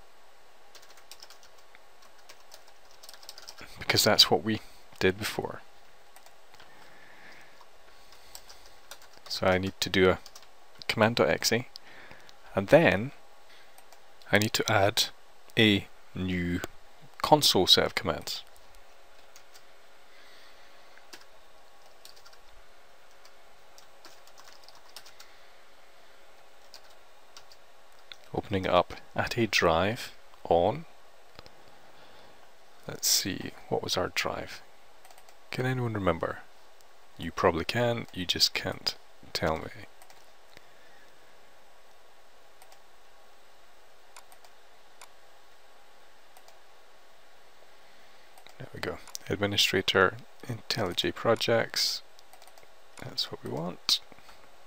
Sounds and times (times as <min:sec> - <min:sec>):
Typing: 0:00.7 - 0:03.6, 0:08.3 - 0:09.3, 0:21.1 - 0:22.4, 0:23.8 - 0:25.3, 0:26.6 - 0:27.6, 0:35.0 - 0:35.4, 0:52.3 - 0:52.7.